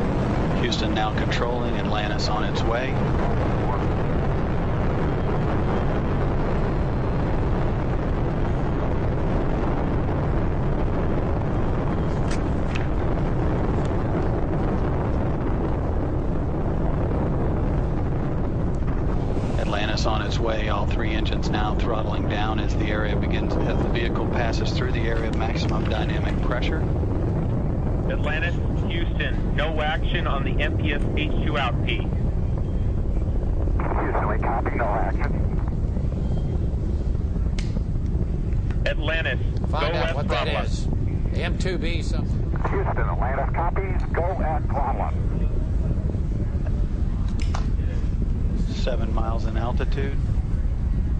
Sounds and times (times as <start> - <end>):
Speech: 0.6 - 3.0, 19.6 - 26.9, 28.1 - 32.1, 33.9 - 35.4, 38.9 - 45.5, 48.6 - 50.2.